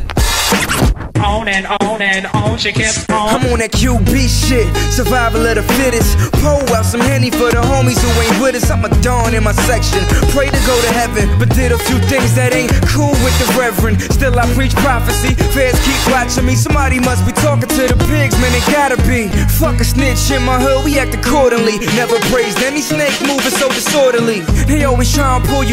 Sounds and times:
Pop music: 0:00.0 - 0:25.7.

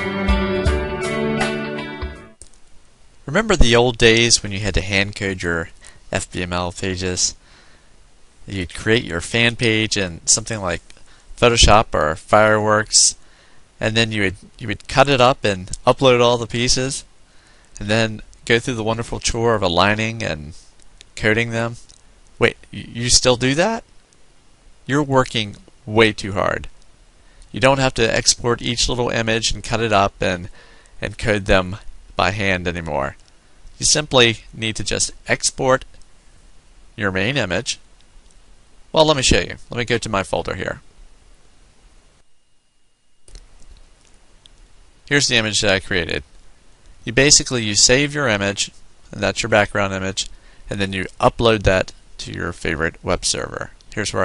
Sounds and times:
Speech: 0:03.3 - 0:07.4, 0:08.5 - 0:13.2, 0:13.8 - 0:17.1, 0:17.8 - 0:20.6, 0:21.2 - 0:23.9, 0:24.9 - 0:26.7, 0:27.5 - 0:33.2, 0:33.8 - 0:35.9, 0:37.0 - 0:37.8, 0:38.9 - 0:40.9, 0:45.1 - 0:46.3, 0:47.0 - 0:54.2.

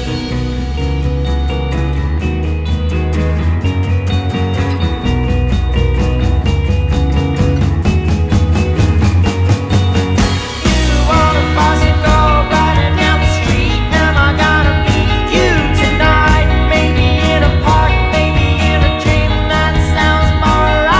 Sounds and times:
Music: 0:00.0 - 0:20.9.

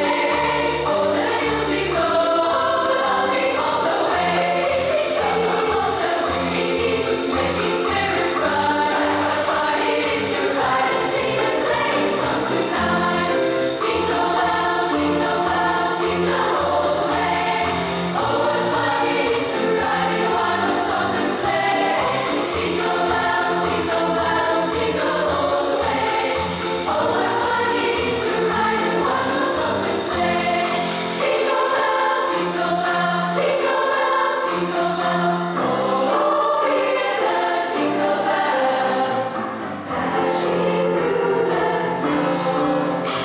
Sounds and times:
Choir: 0:00.0 - 0:43.2
Jingle (music): 0:00.0 - 0:43.2.

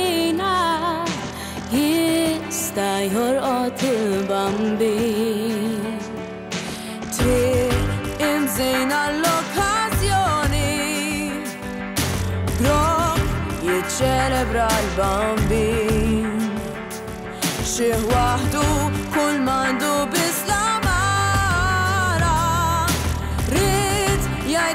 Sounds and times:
Music: 0:00.0 - 0:24.7.

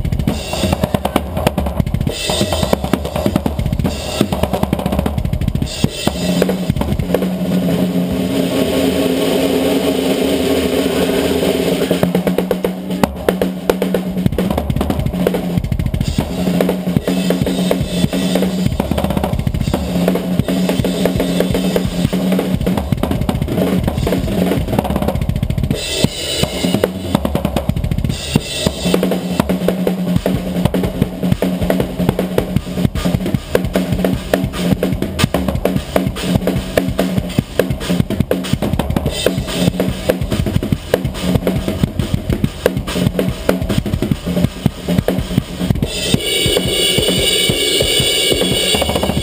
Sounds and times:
Drum: 0:00.0 - 0:49.2
Drum kit: 0:00.0 - 0:49.2.

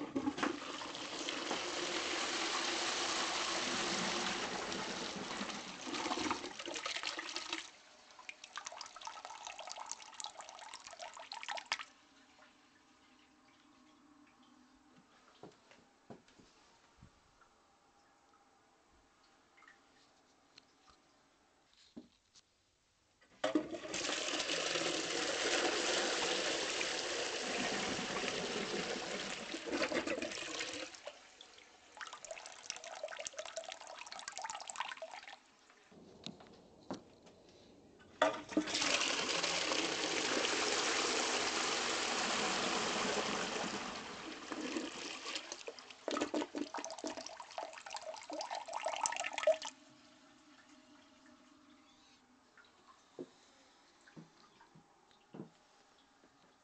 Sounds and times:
Toilet flush: 0:00.0 - 0:13.8, 0:23.4 - 0:35.5, 0:38.2 - 0:51.8
Water: 0:00.0 - 0:15.7, 0:17.2 - 0:21.6, 0:23.4 - 0:36.0, 0:37.6 - 0:56.6.

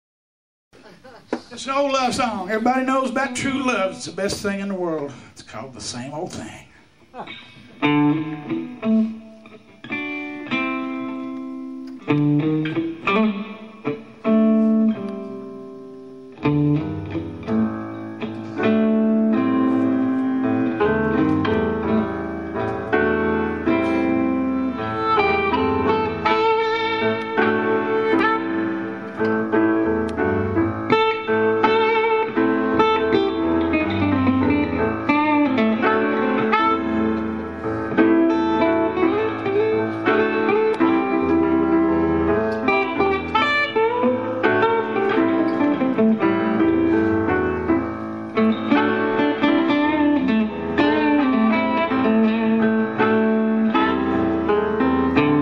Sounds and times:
Guitar: 0:00.8 - 0:55.4.

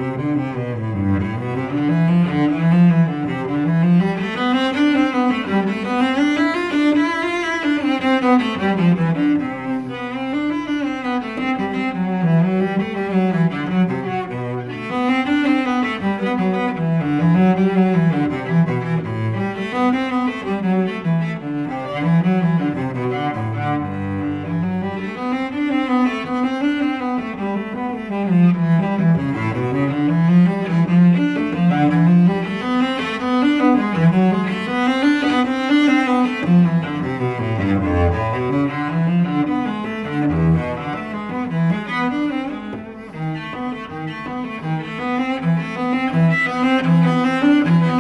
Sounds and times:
Cello: 0:00.0 - 0:48.0.

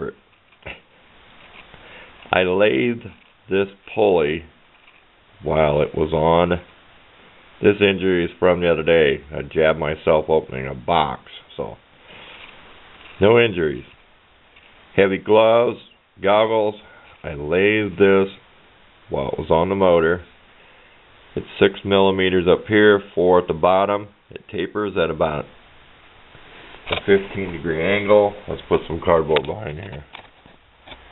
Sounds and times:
Speech: 0:00.0 - 0:00.8, 0:02.3 - 0:04.6, 0:05.4 - 0:06.7, 0:07.6 - 0:11.8, 0:13.2 - 0:14.0, 0:15.0 - 0:18.5, 0:19.1 - 0:20.3, 0:21.4 - 0:25.6, 0:27.0 - 0:30.1.

